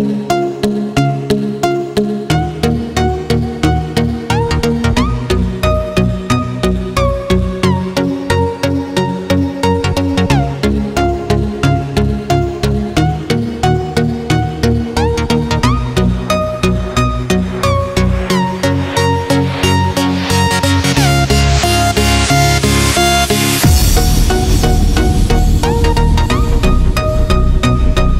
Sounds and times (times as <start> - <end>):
Independent music: 0.0 - 28.1.